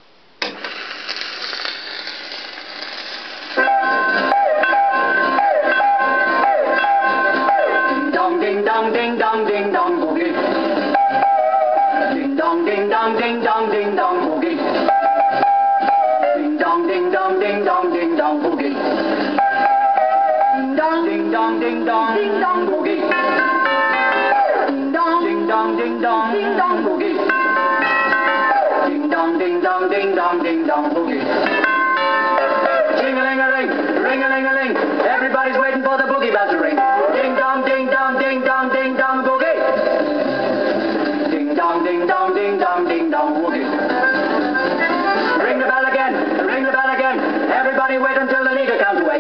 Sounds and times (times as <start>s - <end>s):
Music: 3.0s - 49.2s.